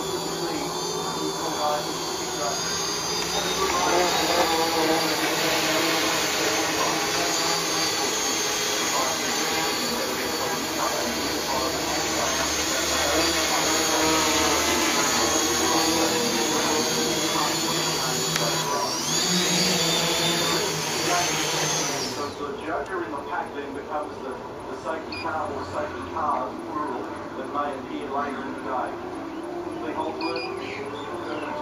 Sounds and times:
Outside, rural or natural: 0:00.0 - 0:22.4
Speech: 0:00.1 - 0:31.6.

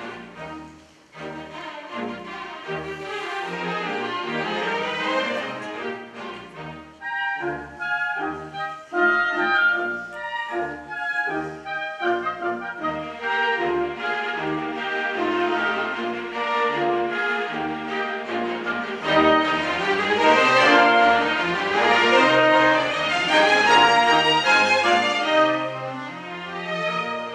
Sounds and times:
Orchestra: 0:00.0 - 0:27.3
Violin, fiddle: 0:00.0 - 0:27.3.

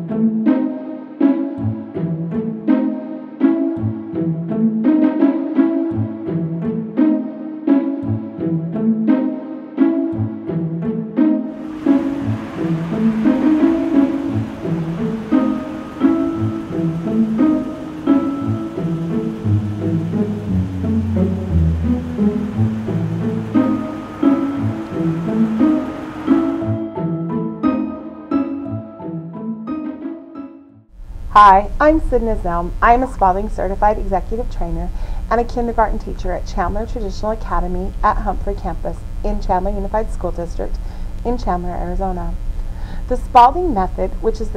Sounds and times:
Music: 0:00.0 - 0:44.5
Speech: 0:31.4 - 0:42.4, 0:43.1 - 0:44.5.

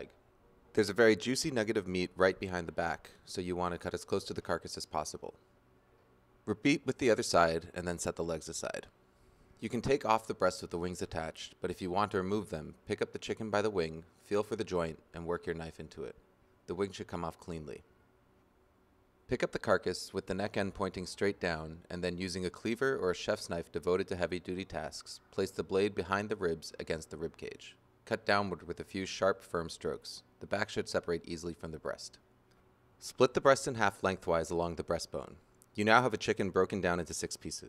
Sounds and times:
Speech: 0:00.0 - 0:05.4, 0:06.4 - 0:09.0, 0:09.6 - 0:17.9, 0:19.3 - 0:32.2, 0:33.0 - 0:37.6.

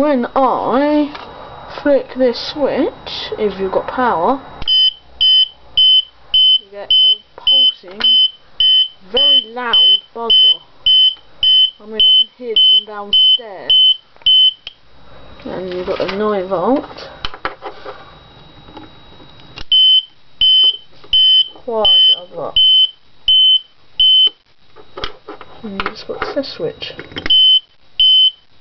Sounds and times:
Speech: 0:00.0 - 0:04.5, 0:06.6 - 0:08.1, 0:09.0 - 0:10.6, 0:11.8 - 0:13.8, 0:15.4 - 0:17.1, 0:21.6 - 0:22.6, 0:25.6 - 0:27.1
Fire alarm: 0:04.7 - 0:14.7, 0:19.7 - 0:24.4, 0:27.3 - 0:28.5.

